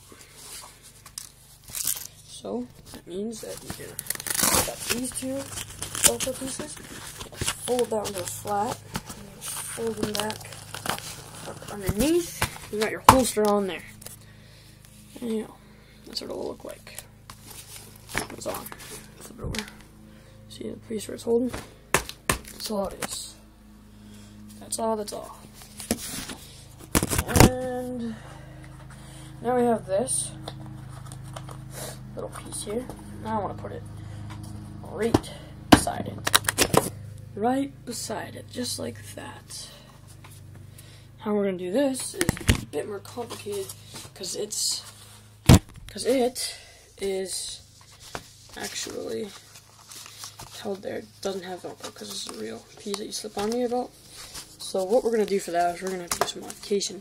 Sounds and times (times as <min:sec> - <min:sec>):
Speech: 0:02.3 - 0:05.5, 0:06.1 - 0:06.8, 0:07.6 - 0:10.5, 0:11.7 - 0:13.9, 0:15.2 - 0:17.0, 0:18.3 - 0:18.7, 0:20.5 - 0:21.6, 0:22.6 - 0:23.4, 0:24.6 - 0:25.4, 0:27.2 - 0:28.2, 0:29.4 - 0:30.4, 0:32.2 - 0:33.8, 0:34.8 - 0:36.2, 0:37.4 - 0:39.8, 0:41.2 - 0:44.9, 0:45.9 - 0:47.6, 0:48.6 - 0:49.4, 0:50.6 - 0:53.9, 0:54.6 - 0:57.0.